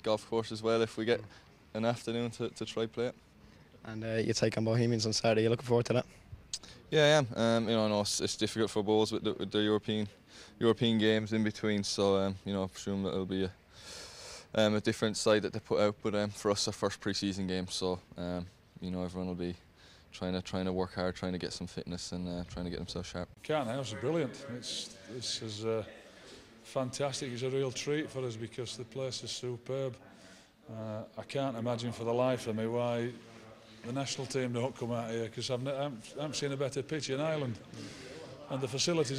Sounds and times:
Speech: 0.0s - 3.2s, 3.8s - 6.1s, 6.9s - 13.6s, 14.6s - 39.1s.

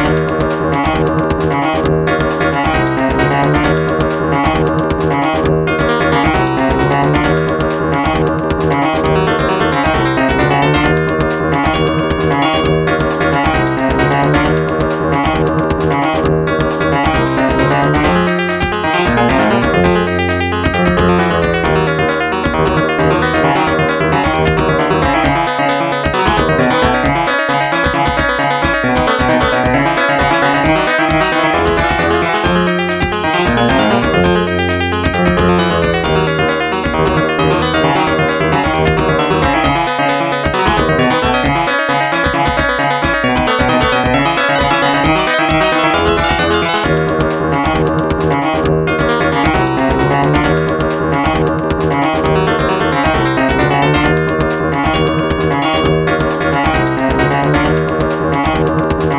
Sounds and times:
Music: 0.0s - 59.1s.

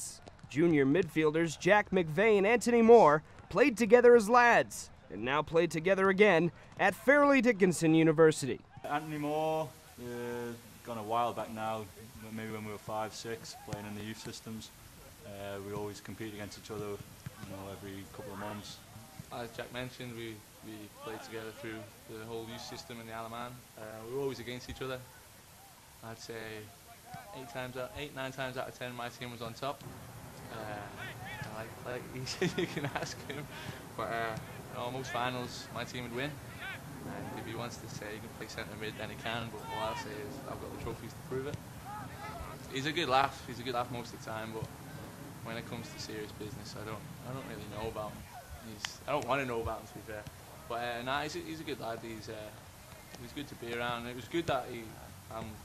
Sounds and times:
Speech: 0.0s - 25.1s, 26.0s - 29.8s, 30.5s - 36.4s, 37.1s - 41.5s, 42.2s - 44.7s, 45.5s - 52.6s, 53.2s - 55.6s.

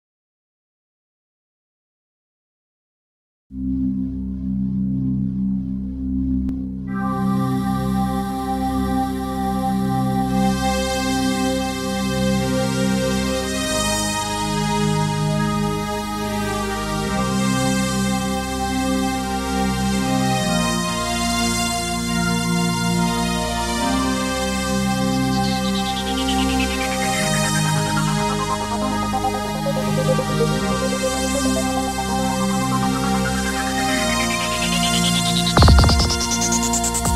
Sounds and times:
Music: 3.5s - 37.1s.

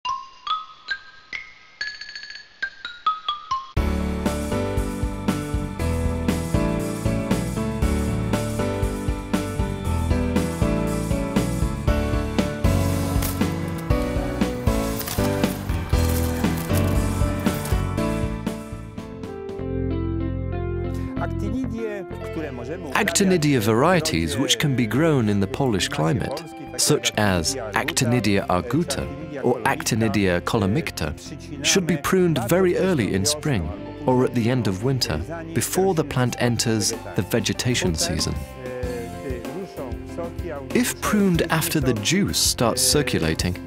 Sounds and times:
Music: 0.0s - 43.6s.

